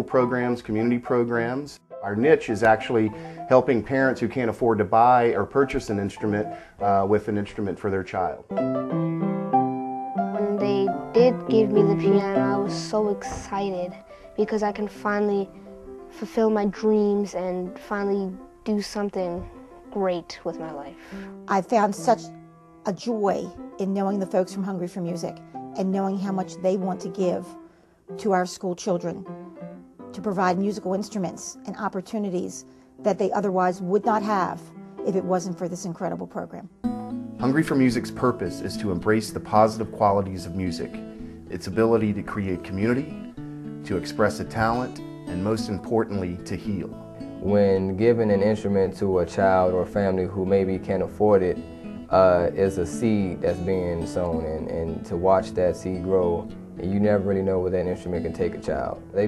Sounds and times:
Speech: 0.0 - 8.4, 10.4 - 15.5, 16.2 - 22.3, 22.9 - 27.5, 28.2 - 29.2, 30.2 - 36.7, 37.4 - 41.0, 41.6 - 43.1, 43.9 - 59.2
Music: 0.0 - 59.2.

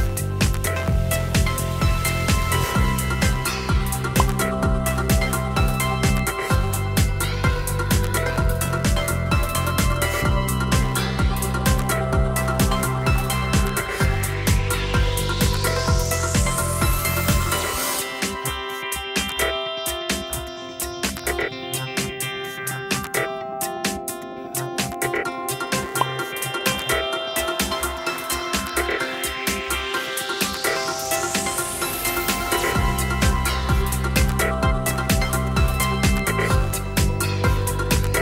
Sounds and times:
Music: 0.0 - 38.2.

